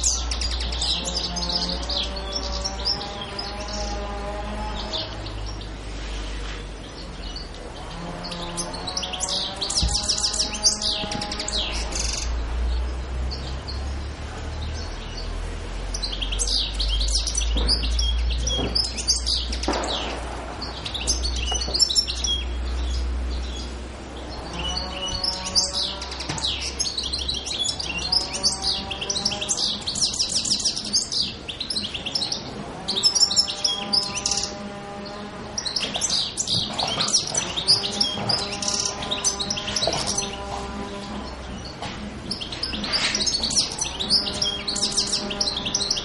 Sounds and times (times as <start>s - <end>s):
Chirp, tweet: 0.0s - 46.0s.